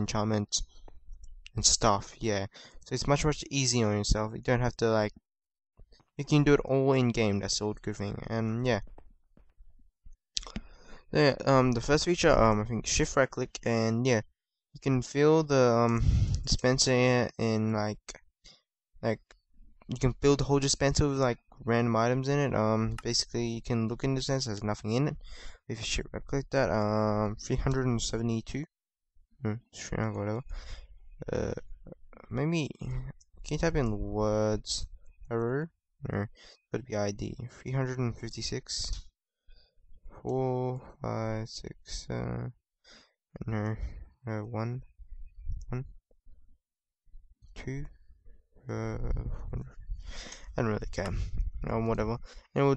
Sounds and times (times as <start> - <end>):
Speech: 0.0 - 0.6, 1.5 - 5.2, 6.2 - 8.9, 10.4 - 18.2, 19.0 - 19.3, 19.9 - 28.7, 29.4 - 30.5, 31.2 - 39.0, 40.2 - 42.6, 43.4 - 44.9, 45.6 - 45.9, 47.6 - 47.9, 48.7 - 49.8, 50.5 - 52.7.